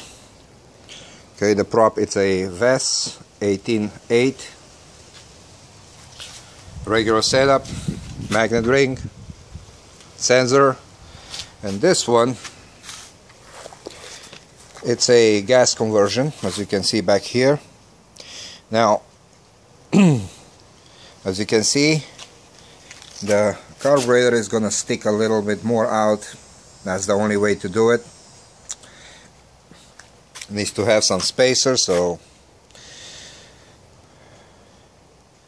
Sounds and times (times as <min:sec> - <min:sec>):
Outside, urban or manmade: 0:00.0 - 0:35.4
Speech: 0:01.4 - 0:04.6, 0:06.8 - 0:09.1, 0:10.2 - 0:10.9, 0:11.6 - 0:12.5, 0:14.8 - 0:17.7, 0:18.7 - 0:19.1, 0:21.2 - 0:22.2, 0:23.2 - 0:28.1, 0:30.4 - 0:32.2.